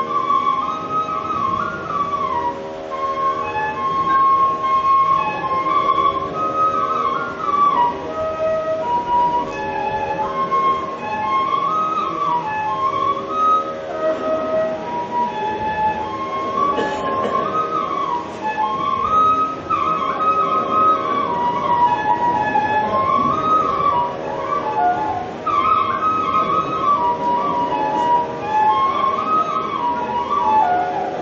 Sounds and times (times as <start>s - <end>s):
Flute: 0.0s - 31.2s.